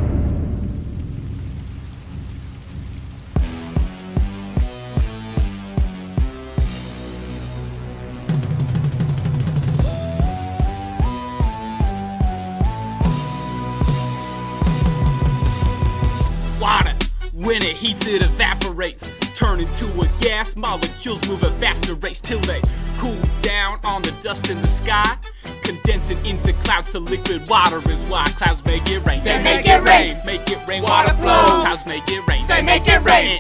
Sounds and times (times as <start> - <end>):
Music: 3.4 - 33.4
Speech: 16.6 - 19.0, 29.1 - 30.2, 30.8 - 33.4.